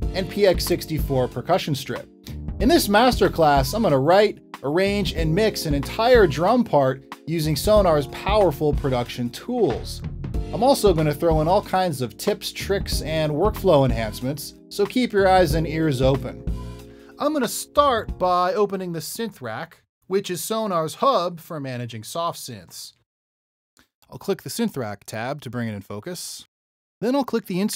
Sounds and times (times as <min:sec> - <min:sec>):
Bass drum: 0:00.0 - 0:01.3, 0:02.3 - 0:04.0, 0:05.1 - 0:06.5, 0:07.6 - 0:09.1, 0:09.7 - 0:11.7, 0:12.8 - 0:14.2, 0:15.4 - 0:16.8
Drum kit: 0:00.0 - 0:16.9, 0:17.6 - 0:18.5.